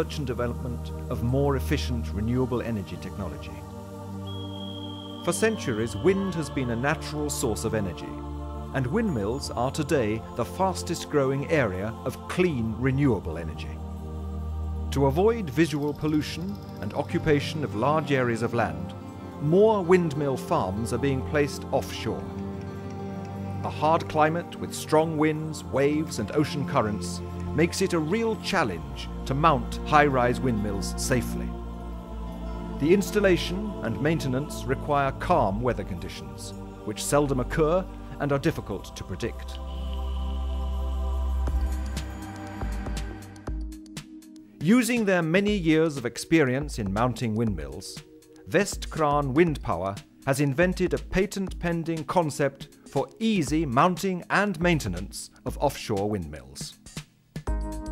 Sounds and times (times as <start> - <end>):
Speech: 0.0 - 3.6, 5.3 - 8.2, 8.8 - 13.8, 14.9 - 22.3, 23.6 - 31.5, 32.8 - 39.6, 44.6 - 57.0
Music: 0.0 - 57.9.